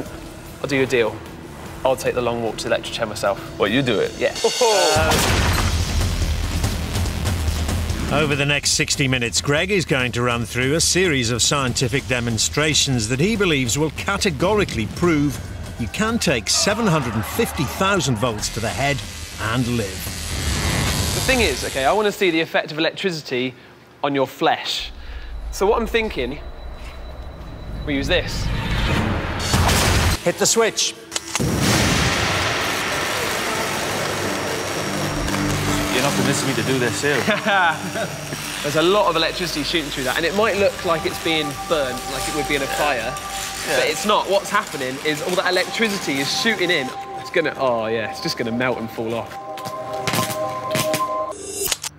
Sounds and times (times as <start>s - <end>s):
Music: 0.0s - 21.9s, 24.8s - 51.9s.